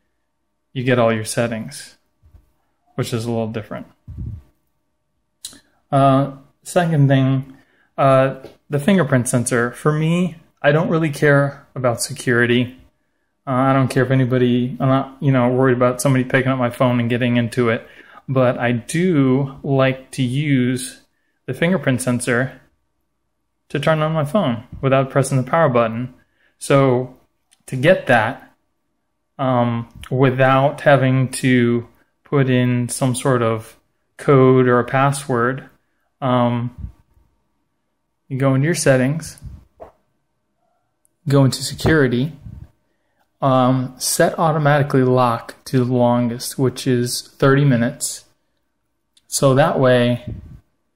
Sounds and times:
Speech: 0.8 - 2.0, 3.0 - 4.5, 5.5 - 12.9, 13.5 - 22.7, 23.7 - 28.6, 29.4 - 37.0, 38.3 - 39.7, 41.2 - 42.7, 43.4 - 48.4, 49.2 - 50.6.

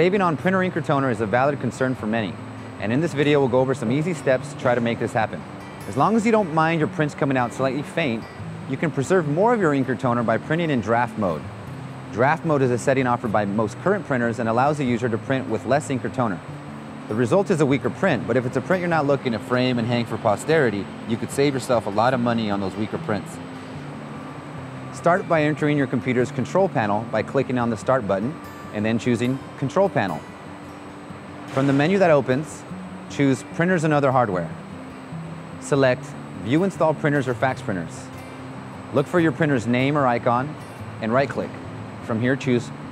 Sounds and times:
Speech: 0.0 - 11.5, 12.1 - 16.4, 17.1 - 23.4, 25.0 - 30.2, 31.6 - 34.6, 35.6 - 38.1, 38.9 - 42.8
Music: 0.0 - 42.9.

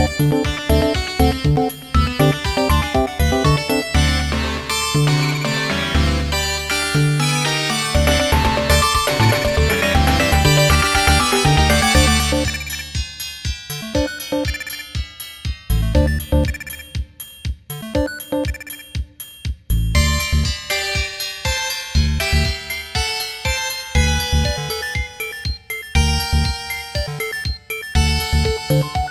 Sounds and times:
Theme music: 0.0 - 13.0.

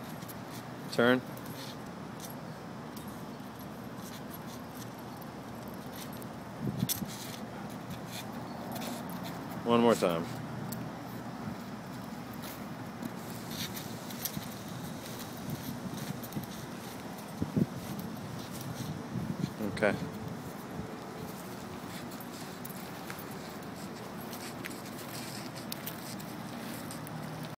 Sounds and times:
Speech: 0.9 - 1.3, 9.6 - 10.4, 19.6 - 20.1.

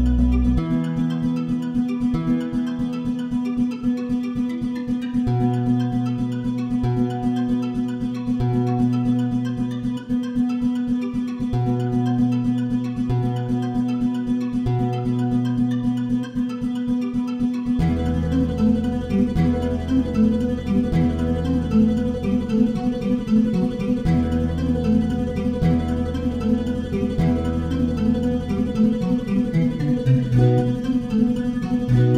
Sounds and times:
Acoustic guitar: 0.0 - 32.1
Strum: 0.0 - 32.1.

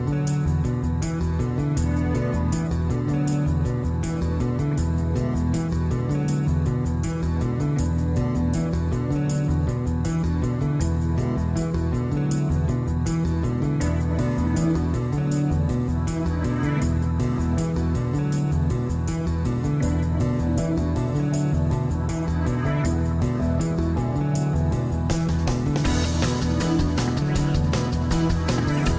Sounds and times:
Music: 0.0 - 28.9.

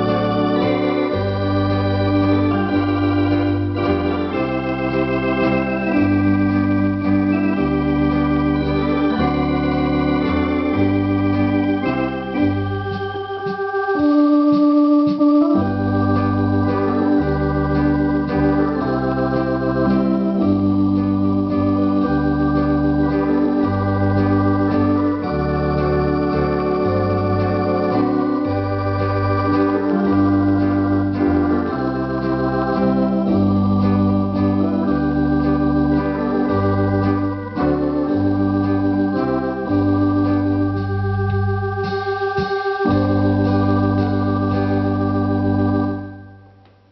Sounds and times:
Hammond organ: 0.0 - 46.9
Piano: 0.0 - 46.9.

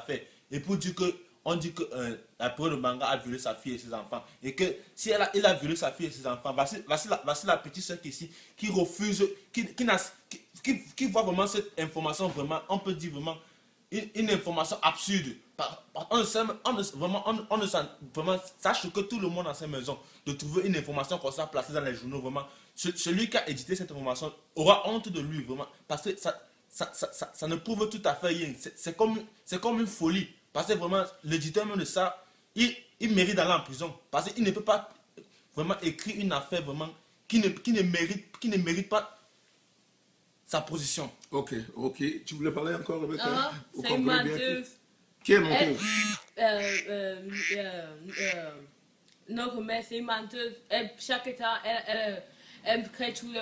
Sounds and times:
Male speech, man speaking: 0.0 - 13.4, 14.0 - 34.9, 35.6 - 39.1, 40.5 - 44.7, 45.3 - 45.9.

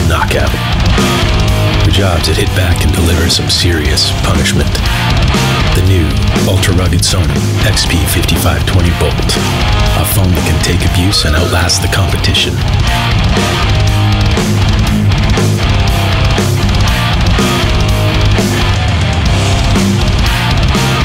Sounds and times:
Speech: 0.0 - 0.6, 1.8 - 4.8, 5.7 - 12.6
Music: 0.0 - 21.0.

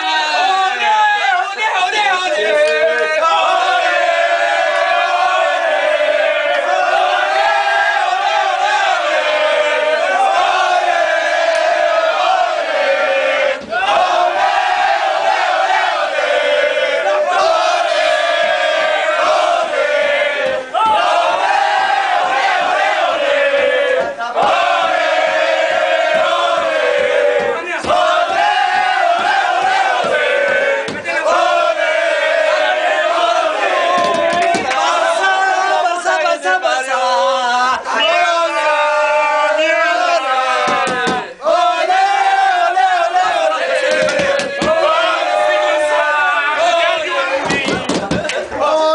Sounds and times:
Singing: 0.0 - 48.9.

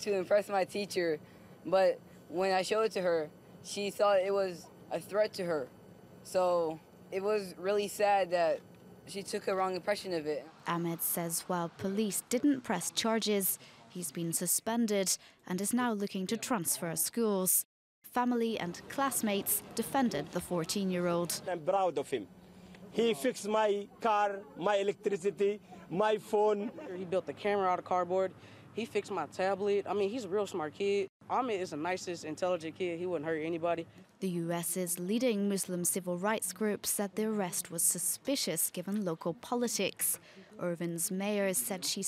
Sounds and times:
Speech: 6.3 - 22.3, 23.0 - 42.0.

